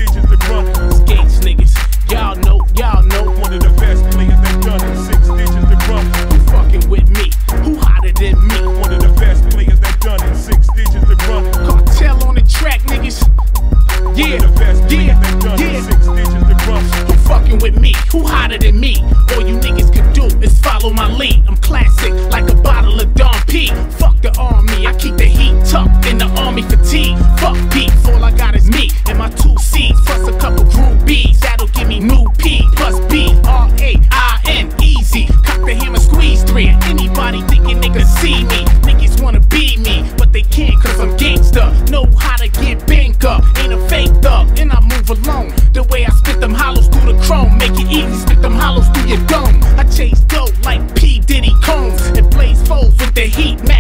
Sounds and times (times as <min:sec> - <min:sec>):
Music: 0:00.0 - 0:53.8.